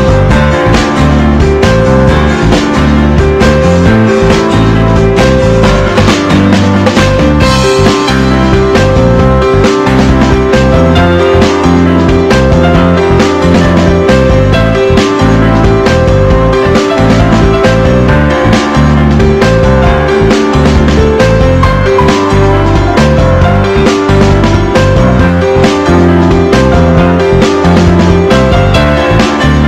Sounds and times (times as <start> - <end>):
Music: 0.0 - 29.6.